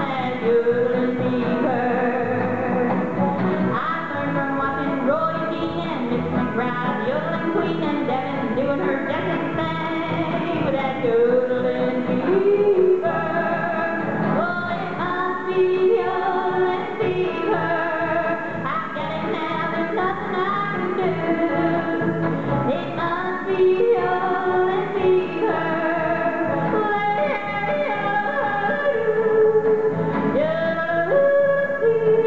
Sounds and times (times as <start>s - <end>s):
Bowed string instrument: 0.0s - 32.2s
Country: 0.0s - 32.2s
Yodeling: 6.6s - 32.2s.